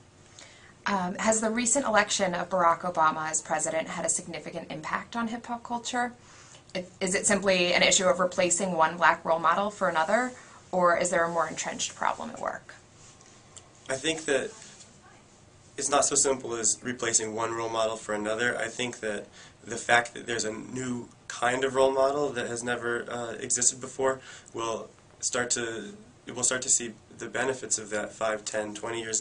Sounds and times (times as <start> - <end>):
Inside, small room: 0.0 - 29.2
Speech: 0.9 - 6.2, 13.9 - 15.2, 15.8 - 29.2.